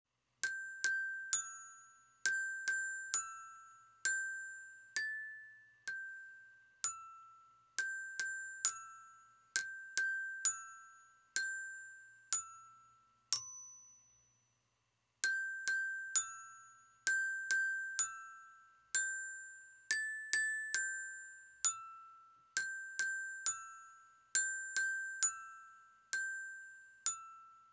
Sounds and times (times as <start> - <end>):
Glockenspiel: 0.1 - 27.7
Inside, small room: 0.1 - 27.7.